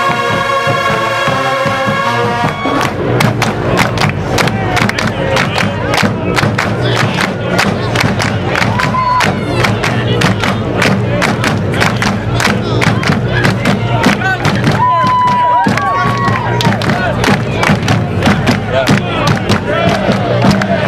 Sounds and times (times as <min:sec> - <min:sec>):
Cheering: 0:00.0 - 0:03.0, 0:03.7 - 0:20.8
Crowd: 0:00.0 - 0:20.8.